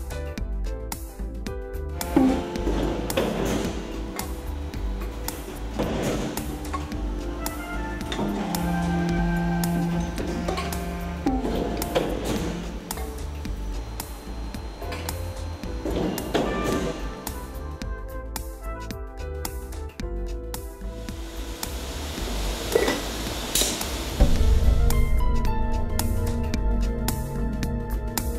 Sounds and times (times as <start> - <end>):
Music: 0.0 - 28.3
Inside, large room or hall: 2.0 - 17.7.